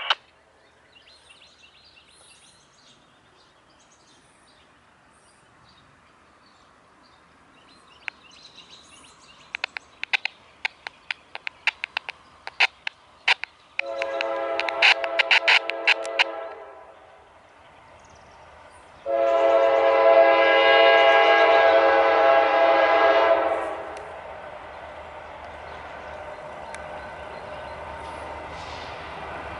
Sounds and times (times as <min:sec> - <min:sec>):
Environmental noise: 0:00.0 - 0:29.6
Railroad car, train wagon: 0:00.0 - 0:29.6
Train: 0:00.0 - 0:29.6.